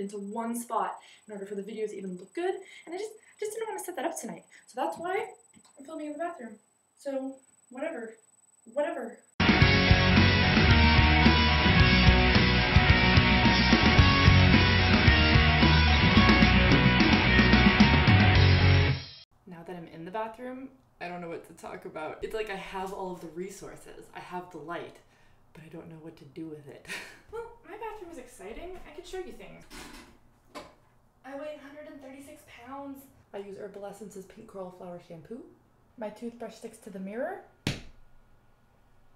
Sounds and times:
Speech: 0:00.0 - 0:09.2, 0:19.5 - 0:25.0, 0:25.6 - 0:29.7, 0:31.3 - 0:37.5
Music: 0:09.4 - 0:19.2.

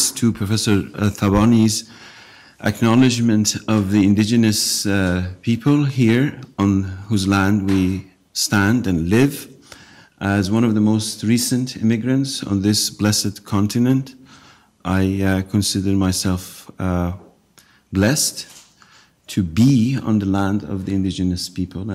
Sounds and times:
Male speech, man speaking: 0:00.0 - 0:01.9, 0:02.6 - 0:09.6, 0:10.2 - 0:14.2, 0:14.8 - 0:17.3, 0:17.9 - 0:18.5, 0:19.3 - 0:21.9
Narration, monologue: 0:00.0 - 0:21.9.

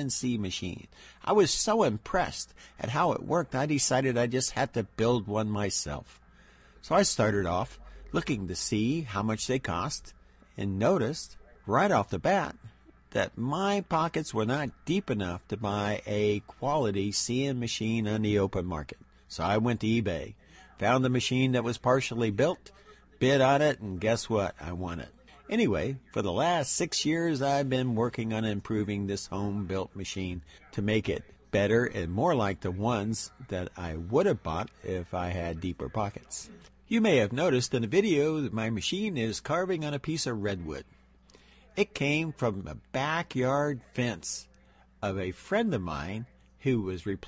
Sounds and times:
Speech: 0:00.0 - 0:41.0, 0:41.6 - 0:47.2.

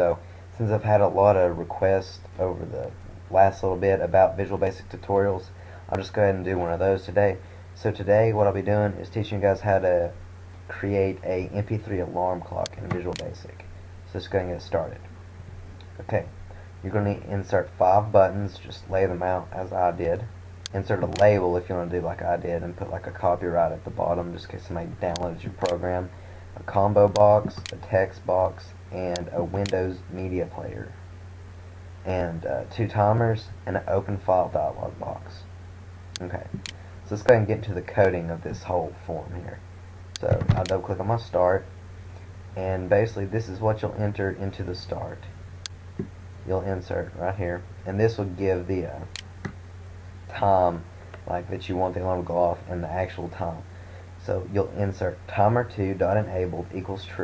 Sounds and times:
Speech: 0:00.0 - 0:15.1, 0:16.0 - 0:31.0, 0:32.0 - 0:35.5, 0:36.2 - 0:39.6, 0:40.2 - 0:41.7, 0:42.6 - 0:45.4, 0:46.4 - 0:49.1, 0:50.3 - 0:57.2.

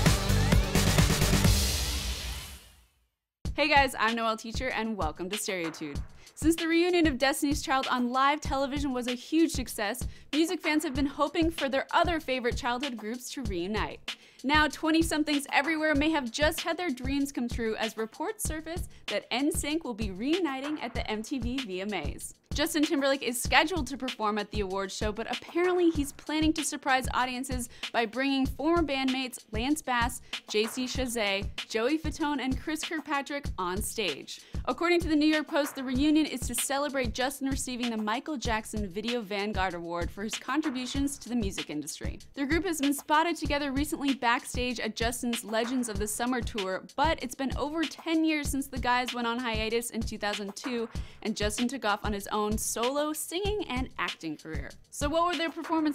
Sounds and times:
Music: 0:00.0 - 0:55.9
Speech: 0:03.6 - 0:55.9.

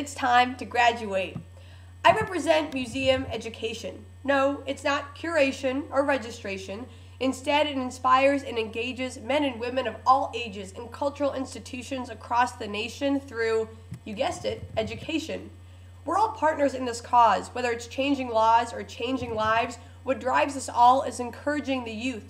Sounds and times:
Female speech, woman speaking: 0:00.0 - 0:01.4, 0:02.1 - 0:15.5, 0:16.1 - 0:22.3
Narration, monologue: 0:00.0 - 0:22.3.

